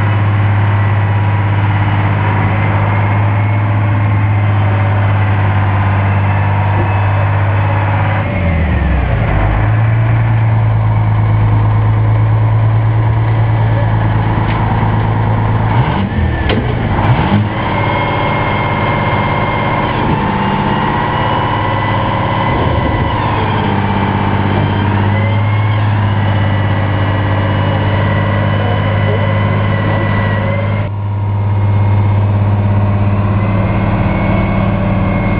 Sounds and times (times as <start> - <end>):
Truck: 0.0 - 35.3
Speech: 13.6 - 14.2, 28.5 - 30.9.